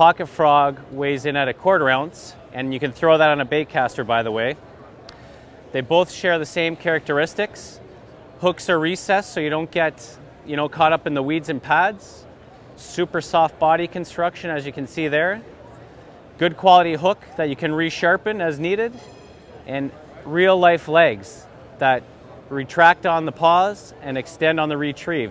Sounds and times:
Speech: 0:00.0 - 0:04.6, 0:05.7 - 0:19.0, 0:19.7 - 0:25.3.

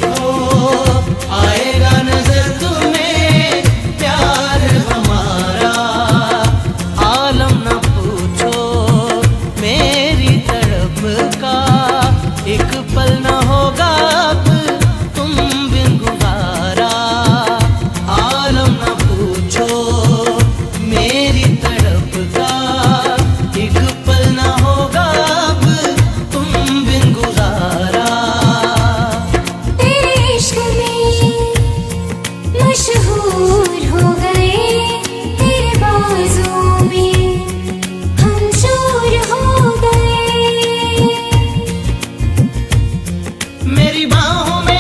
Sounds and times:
Music of Bollywood: 0:00.0 - 0:44.8.

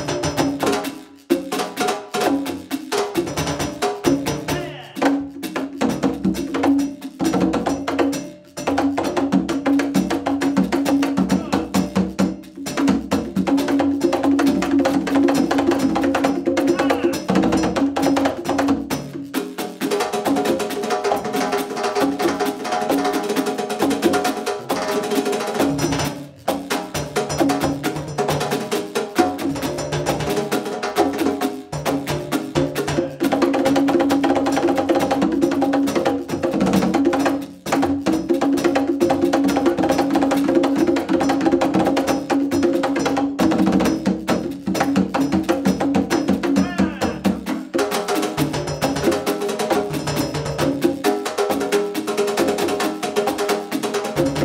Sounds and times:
Drum: 0:00.0 - 0:54.4
Drum kit: 0:00.0 - 0:54.4.

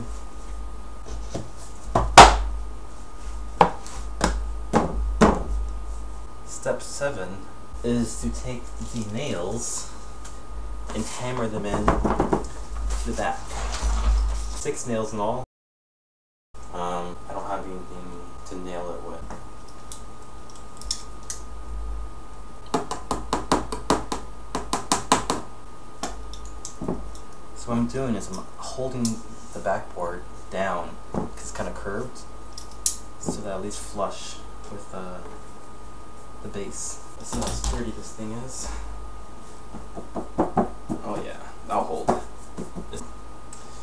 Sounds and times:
Speech: 0:06.5 - 0:10.0, 0:10.9 - 0:12.0, 0:13.0 - 0:13.5, 0:14.6 - 0:15.4, 0:16.7 - 0:19.3, 0:27.6 - 0:32.3, 0:33.2 - 0:35.3, 0:36.4 - 0:38.8, 0:41.0 - 0:42.3.

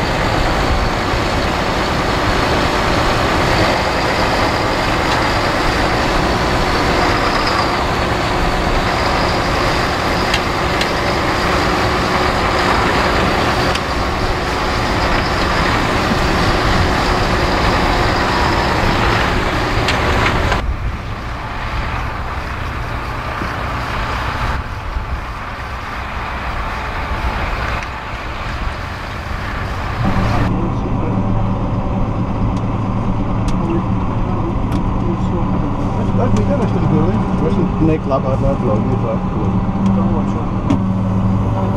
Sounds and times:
Outside, rural or natural: 0:00.0 - 0:41.7
Vehicle: 0:00.0 - 0:41.7.

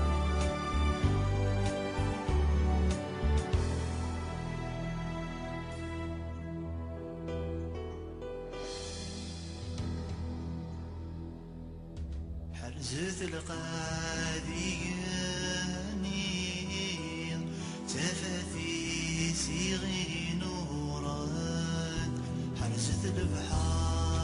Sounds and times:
Music: 0:00.0 - 0:24.2.

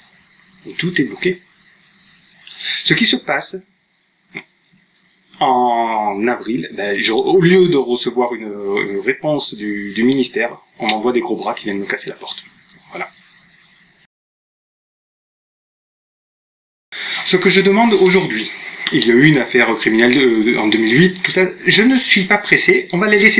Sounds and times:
Male speech, man speaking: 0:00.6 - 0:01.5, 0:02.7 - 0:03.7, 0:05.4 - 0:13.2, 0:17.2 - 0:23.3.

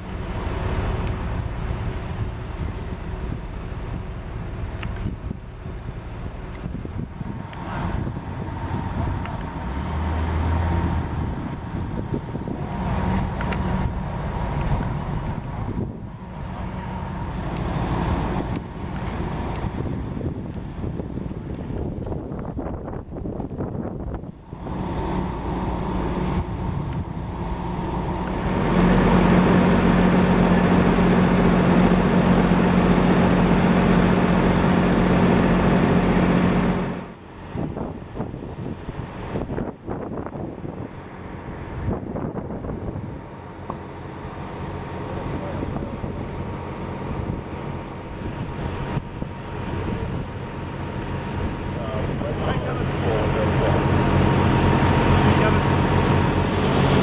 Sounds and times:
Truck: 0:00.0 - 0:57.0.

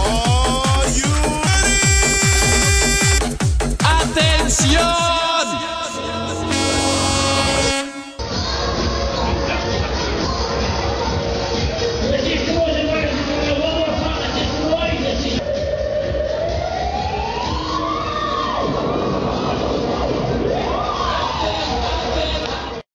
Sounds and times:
Music: 0:00.0 - 0:22.8
Speech: 0:03.8 - 0:06.1, 0:12.0 - 0:15.4.

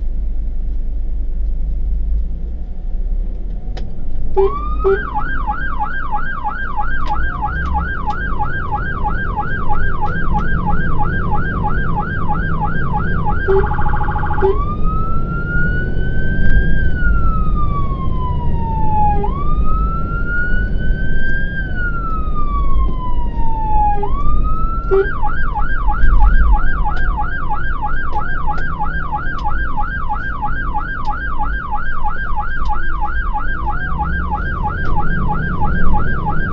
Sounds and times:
Engine: 0:00.0 - 0:36.5
Truck: 0:00.0 - 0:36.5
Fire engine, fire truck (siren): 0:02.6 - 0:36.5.

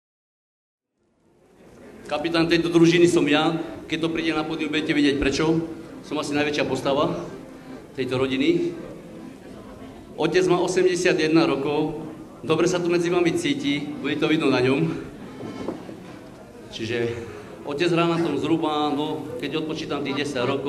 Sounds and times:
Male speech, man speaking: 0:02.1 - 0:07.3, 0:08.0 - 0:08.8, 0:10.2 - 0:15.0, 0:16.7 - 0:20.6
Music: 0:04.0 - 0:20.6.

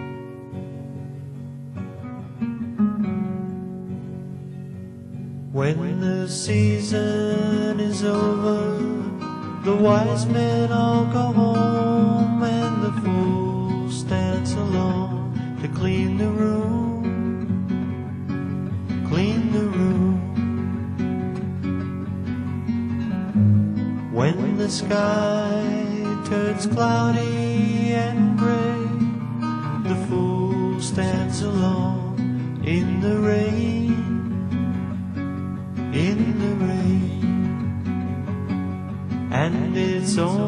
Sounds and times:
Music: 0:00.0 - 0:40.4.

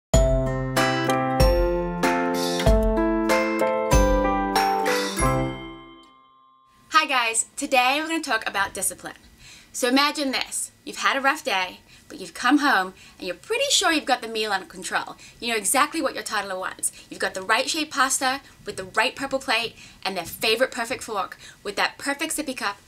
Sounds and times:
Music for children: 0:00.2 - 0:06.8
Speech: 0:06.9 - 0:09.2, 0:09.8 - 0:22.8.

